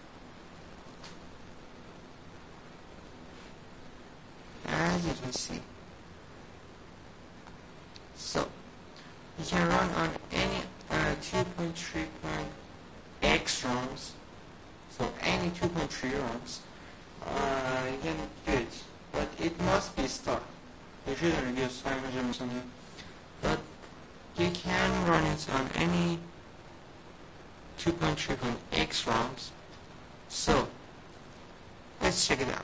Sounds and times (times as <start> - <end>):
Speech: 4.6 - 5.7, 8.1 - 8.6, 9.4 - 12.6, 13.2 - 14.2, 14.9 - 22.8, 23.4 - 23.7, 24.4 - 26.3, 27.8 - 29.6, 30.3 - 30.8, 32.0 - 32.6.